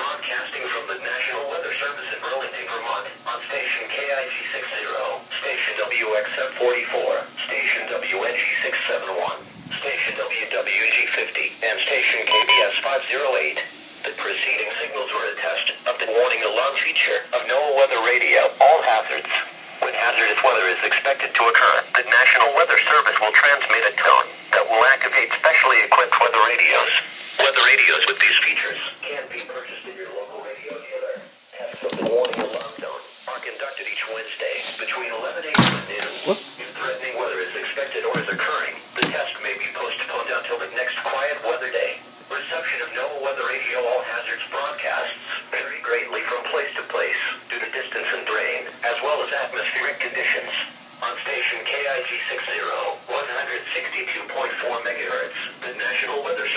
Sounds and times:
Radio: 0.0s - 56.5s
Speech: 0.0s - 56.5s.

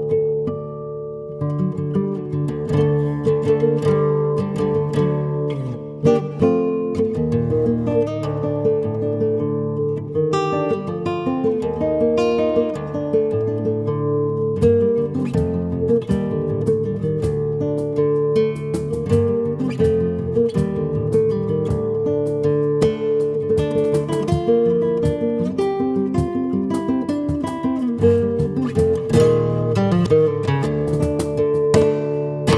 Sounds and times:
Acoustic guitar: 0.0s - 32.5s
Flamenco: 0.0s - 32.5s.

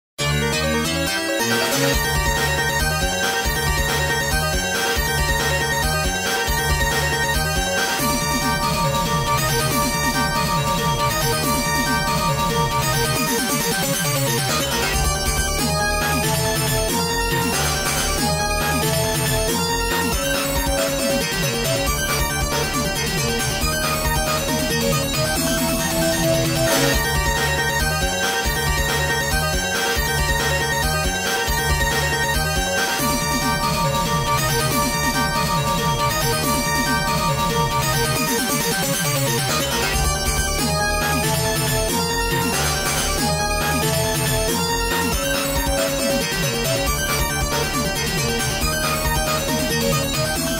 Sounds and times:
Video game music: 0.2s - 50.5s.

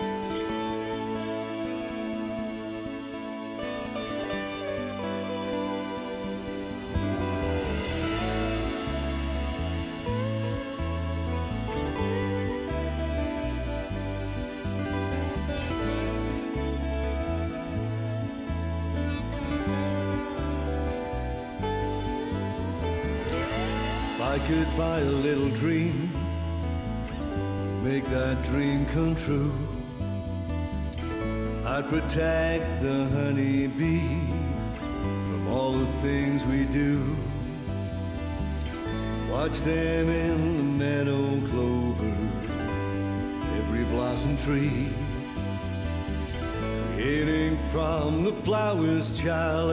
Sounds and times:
Music: 0.0s - 49.7s.

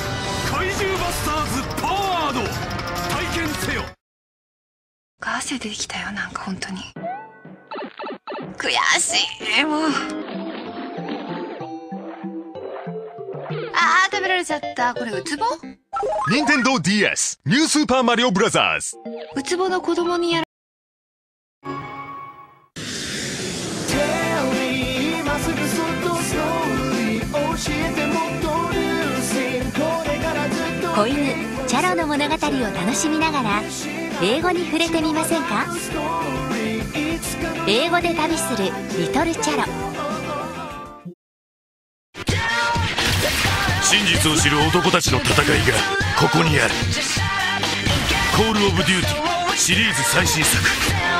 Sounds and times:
Music: 0.0s - 4.0s, 8.6s - 15.8s, 18.4s - 20.4s, 21.6s - 22.7s, 23.9s - 41.2s, 42.2s - 51.1s
Speech: 16.3s - 20.5s, 43.9s - 46.8s, 48.4s - 50.8s.

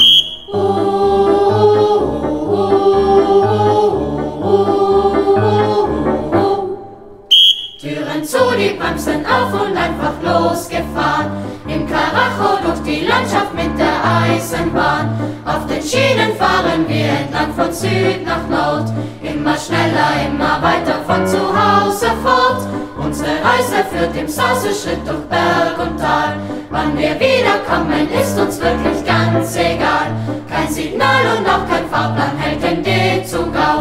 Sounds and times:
Choir: 0.0s - 33.8s.

